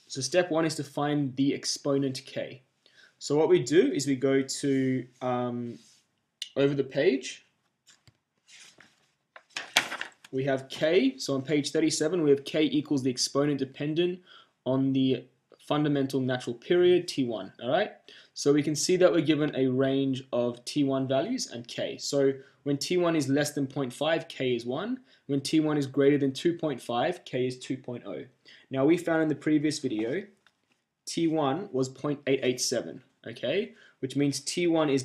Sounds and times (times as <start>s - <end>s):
Speech: 0.1s - 2.6s, 3.2s - 5.8s, 6.4s - 7.4s, 10.3s - 30.4s, 31.1s - 35.0s.